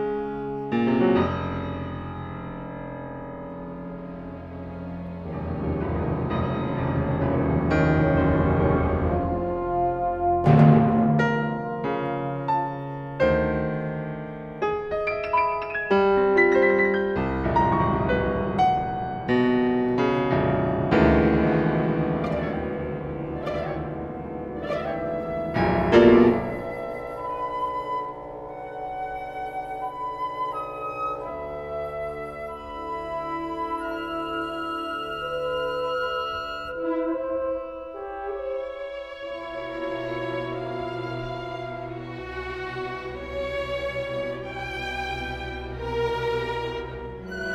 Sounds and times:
Classical music: 0.0 - 47.5
Orchestra: 0.0 - 47.5
Piano: 0.0 - 47.5.

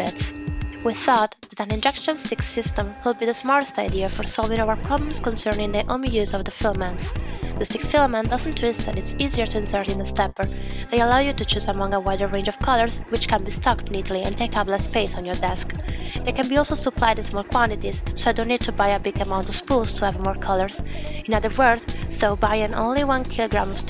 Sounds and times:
Music: 0.0 - 23.9
Speech: 0.0 - 23.9.

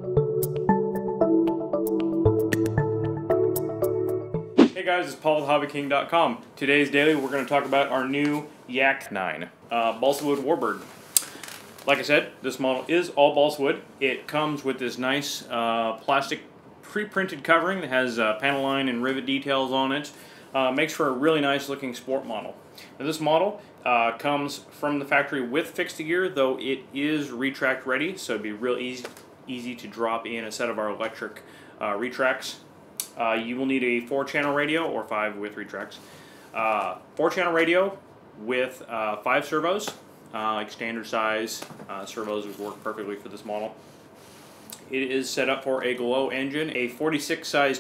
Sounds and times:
Speech: 4.8 - 10.9, 11.9 - 36.0, 36.6 - 43.8, 44.8 - 47.8.

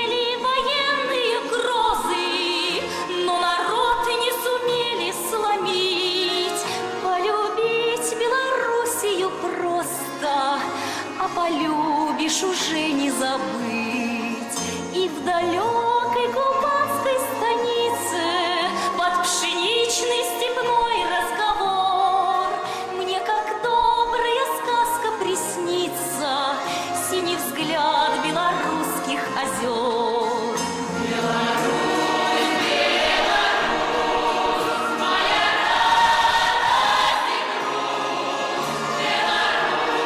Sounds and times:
Music: 0.0 - 40.0.

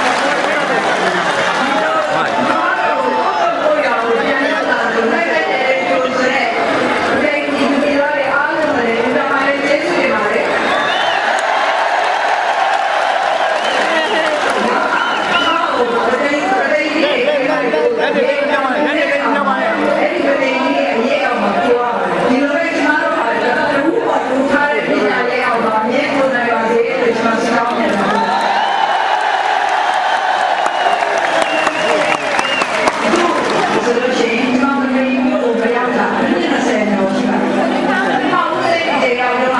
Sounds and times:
Female speech, woman speaking: 1.6 - 10.5, 13.9 - 28.3, 33.0 - 39.5.

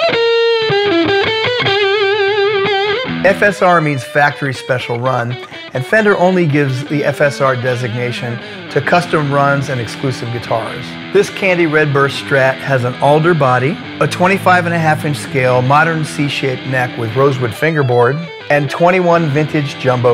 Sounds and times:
Electric guitar: 0.0 - 20.1
Speech: 3.3 - 20.1.

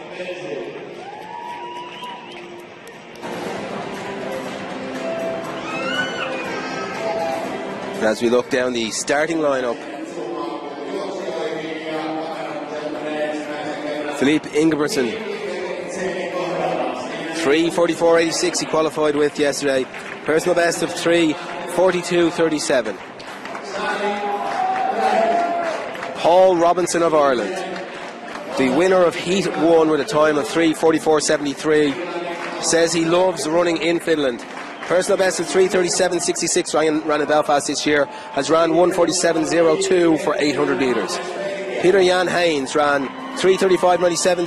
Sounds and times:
Speech: 8.0 - 23.0, 26.2 - 27.8, 28.5 - 44.4.

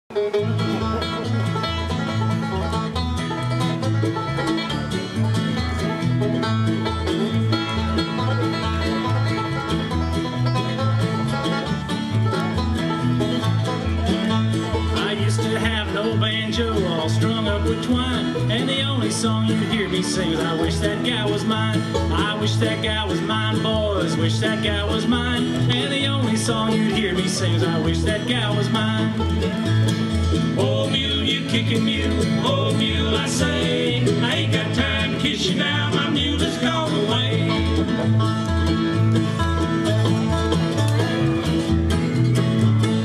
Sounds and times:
Banjo: 0.0 - 43.0
Country: 0.1 - 43.0.

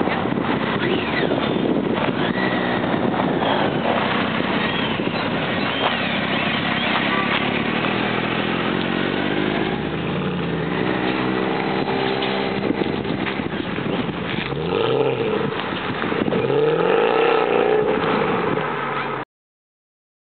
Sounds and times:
Motorcycle: 0.0 - 19.2.

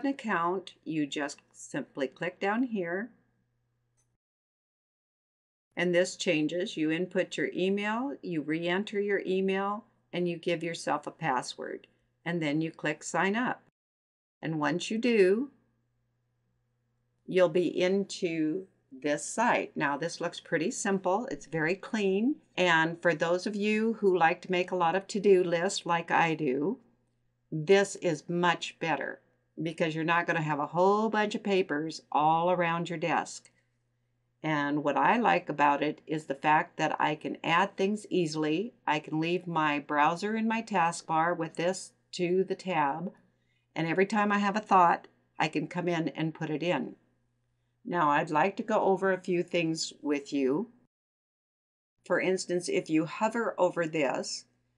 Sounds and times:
Speech: 0.0 - 3.1, 5.8 - 13.7, 14.4 - 15.6, 17.3 - 26.8, 27.6 - 33.5, 34.4 - 43.2, 43.8 - 47.0, 47.9 - 50.7, 52.1 - 54.5.

